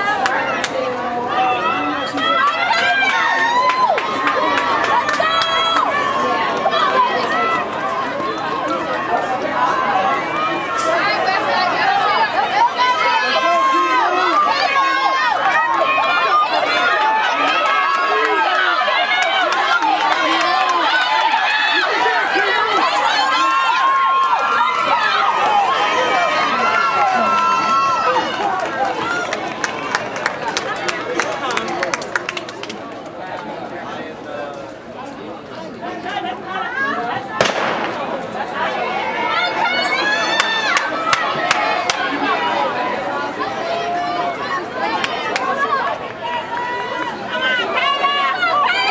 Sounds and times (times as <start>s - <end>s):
Outside, urban or manmade: 0.0s - 48.9s
Run: 0.0s - 48.9s
Speech: 0.0s - 48.9s.